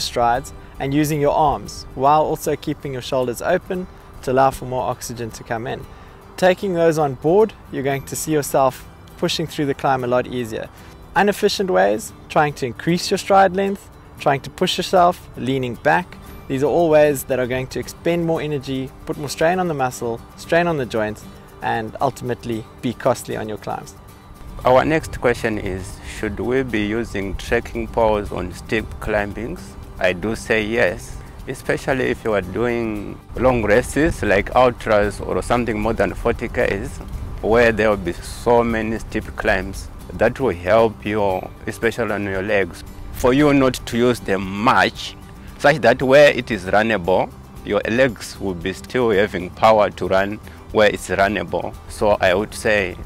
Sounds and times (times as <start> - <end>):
Speech: 0.0 - 5.8, 6.4 - 24.0, 24.6 - 53.0
Music: 0.0 - 53.0.